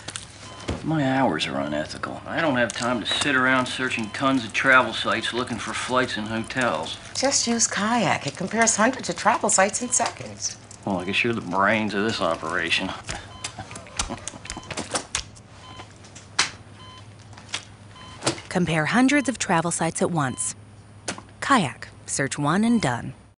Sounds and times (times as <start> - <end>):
Speech: 21.4 - 23.2.